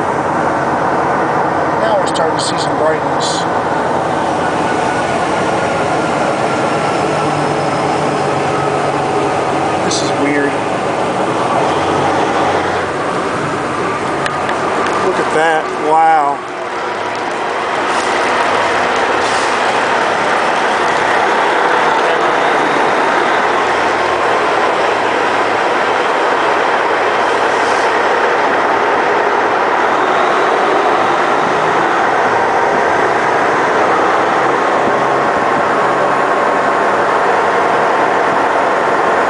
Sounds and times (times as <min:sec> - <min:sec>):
Train: 0:00.0 - 0:39.3.